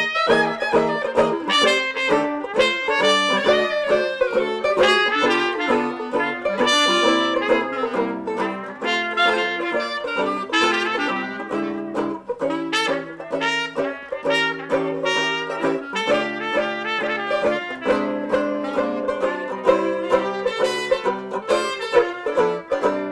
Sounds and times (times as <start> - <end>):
Music: 0.0 - 23.1.